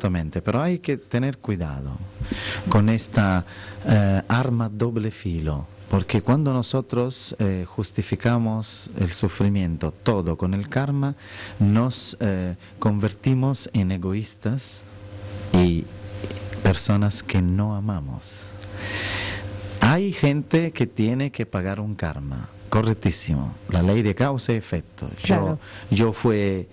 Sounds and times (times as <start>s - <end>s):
Speech: 0.0s - 2.1s, 2.7s - 14.9s, 15.6s - 15.9s, 16.6s - 18.6s, 19.8s - 26.7s.